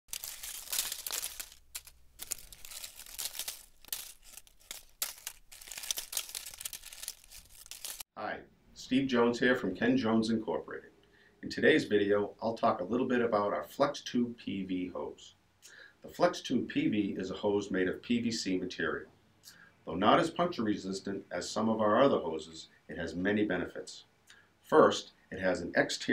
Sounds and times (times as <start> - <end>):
Speech: 8.2 - 15.4, 16.0 - 19.1, 19.8 - 26.1.